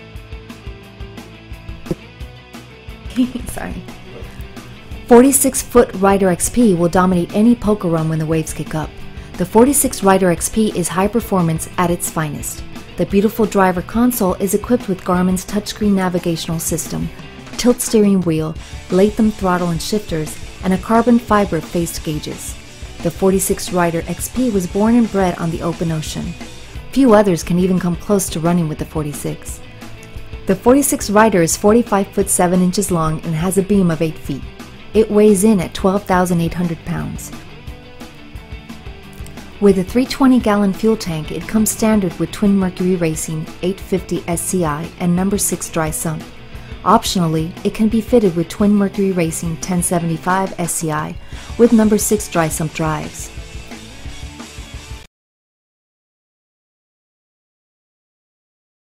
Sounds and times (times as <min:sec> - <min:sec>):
Music: 0:00.0 - 0:55.1
Speech: 0:03.1 - 0:03.9, 0:05.1 - 0:26.3, 0:26.9 - 0:29.6, 0:30.5 - 0:37.3, 0:39.6 - 0:46.2, 0:46.8 - 0:53.3.